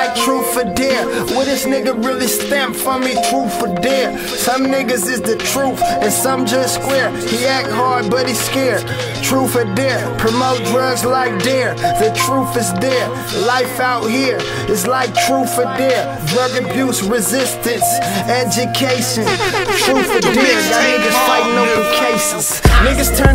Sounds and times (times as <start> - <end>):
Hip hop music: 0.0 - 23.3.